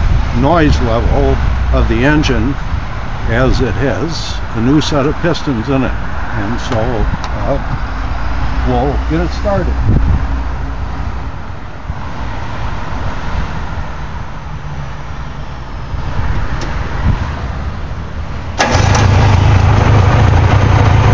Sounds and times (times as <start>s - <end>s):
Truck: 0.0s - 21.1s
Speech: 0.4s - 2.6s, 3.3s - 7.7s, 8.7s - 9.8s.